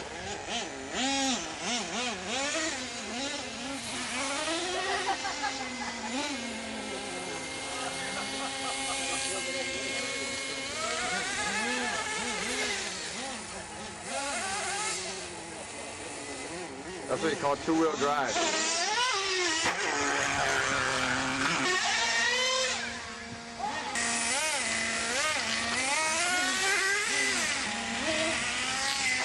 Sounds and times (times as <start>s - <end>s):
Car: 0.0s - 29.2s
Speech: 17.1s - 18.4s.